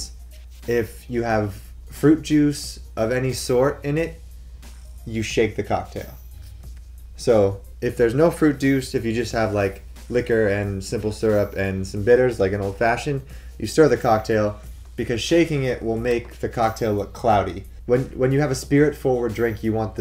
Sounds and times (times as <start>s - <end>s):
Speech: 0.0s - 4.2s, 5.0s - 6.2s, 7.2s - 20.0s
Music: 0.0s - 20.0s.